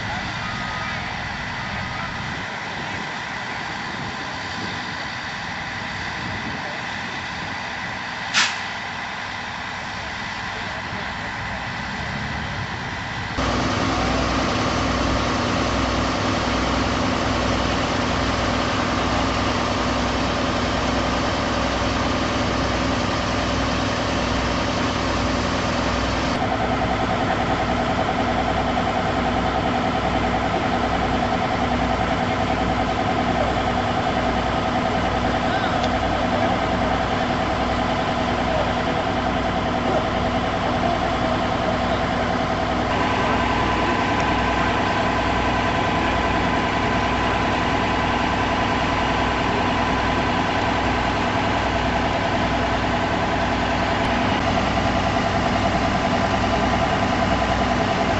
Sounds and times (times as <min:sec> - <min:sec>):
Vehicle: 0:00.0 - 0:58.1.